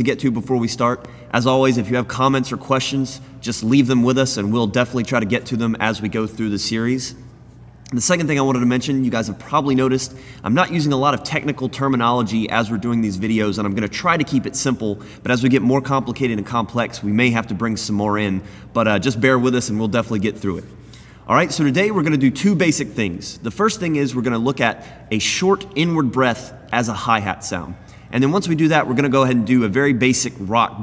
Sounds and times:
Speech: 0.0s - 7.2s, 7.9s - 30.8s.

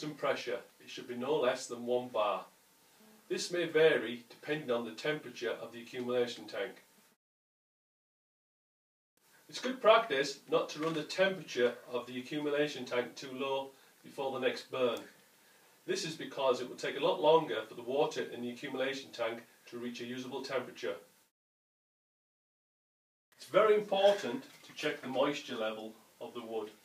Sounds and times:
Speech: 0.0s - 2.5s, 3.3s - 6.8s, 9.5s - 15.2s, 15.9s - 21.1s, 23.4s - 26.8s.

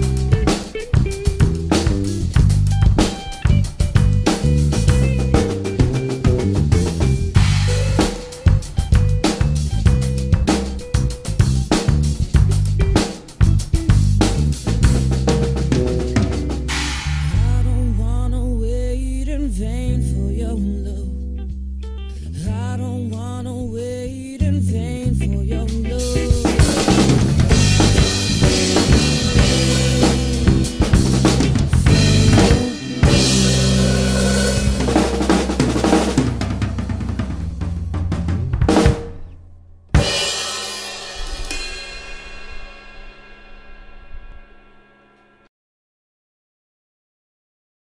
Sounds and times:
Drum roll: 0.0s - 18.2s, 26.0s - 45.5s
Drum kit: 0.0s - 18.4s, 25.5s - 45.5s
Bass drum: 0.0s - 19.0s, 24.9s - 39.3s.

